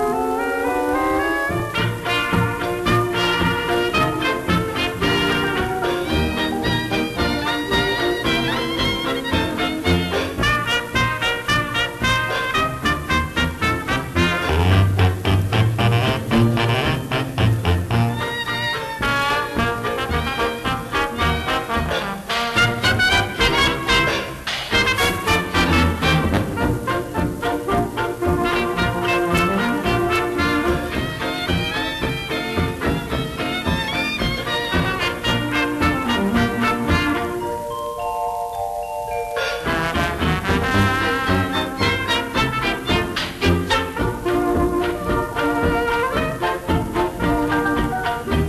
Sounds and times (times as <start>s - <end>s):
Music: 0.0s - 48.4s.